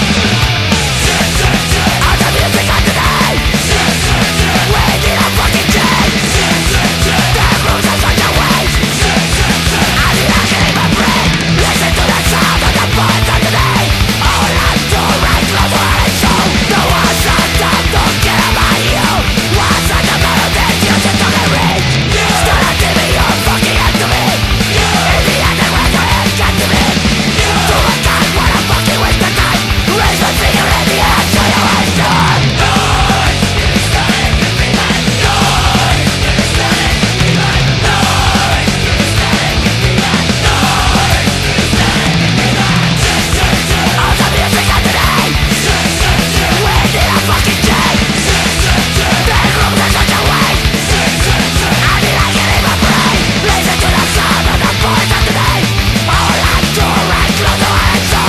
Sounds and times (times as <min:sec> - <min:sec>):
Heavy metal: 0:00.0 - 0:58.2.